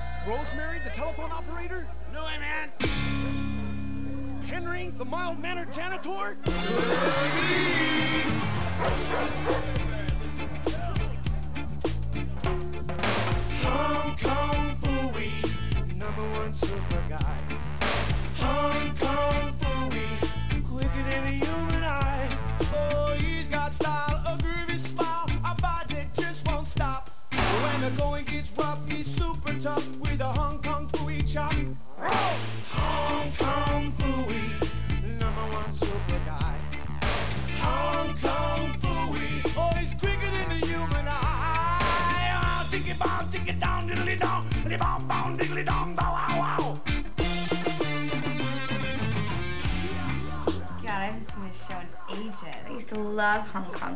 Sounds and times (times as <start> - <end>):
Music: 0.0 - 2.1, 2.7 - 53.9.